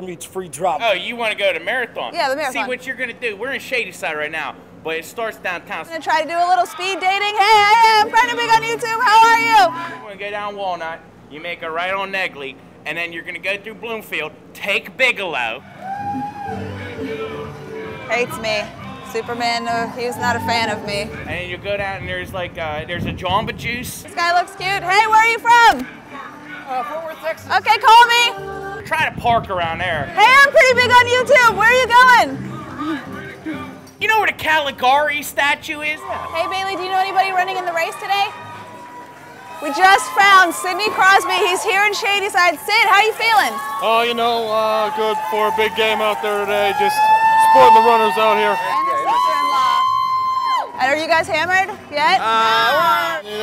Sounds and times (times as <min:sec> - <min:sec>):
Outside, urban or manmade: 0:00.0 - 0:53.4
Music: 0:07.4 - 0:10.2, 0:15.5 - 0:22.4, 0:24.1 - 0:35.4, 0:36.0 - 0:42.2, 0:47.0 - 0:53.4.